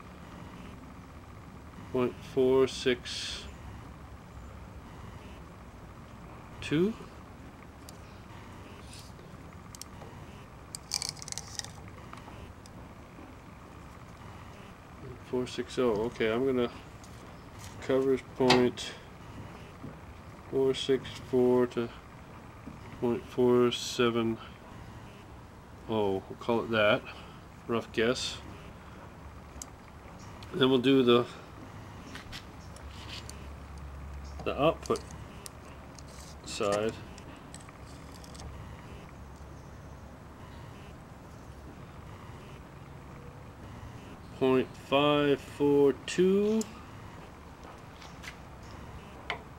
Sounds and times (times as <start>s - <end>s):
Speech: 1.9s - 3.5s, 6.6s - 7.1s, 15.0s - 16.8s, 17.8s - 19.0s, 20.5s - 22.0s, 23.0s - 24.5s, 25.9s - 27.1s, 27.7s - 28.4s, 30.5s - 31.4s, 34.4s - 35.0s, 36.5s - 37.0s, 44.4s - 46.8s.